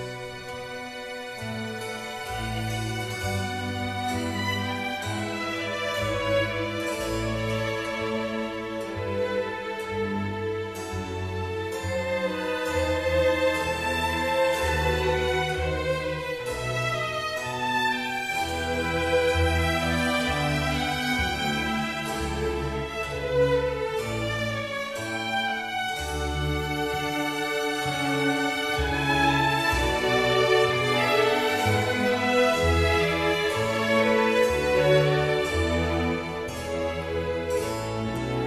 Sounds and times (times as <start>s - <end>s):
Violin, fiddle: 0.0s - 38.4s.